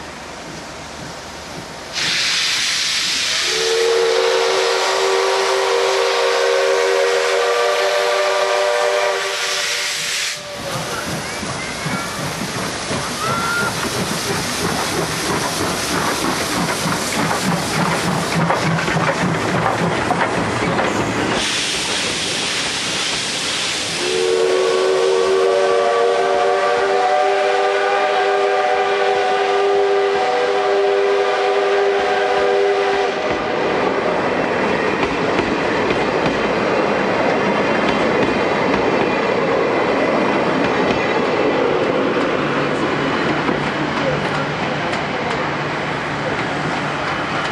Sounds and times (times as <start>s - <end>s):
Hiss: 0.3s - 19.5s, 20.7s - 34.4s
Steam whistle: 2.0s - 10.7s, 23.2s - 33.5s.